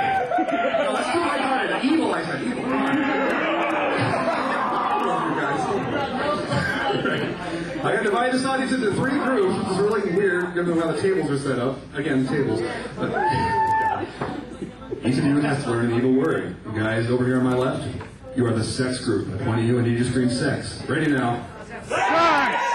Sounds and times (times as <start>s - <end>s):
Speech: 3.9s - 13.5s, 14.4s - 21.9s.